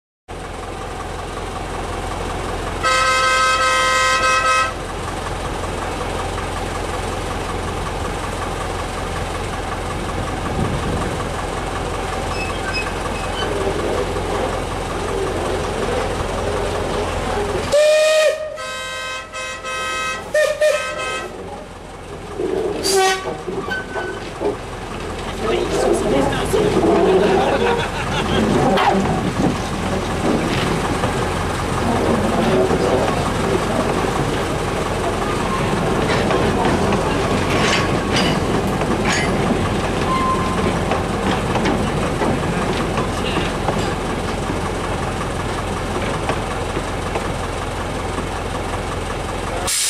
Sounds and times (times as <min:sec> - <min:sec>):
Train: 0:00.3 - 0:49.8.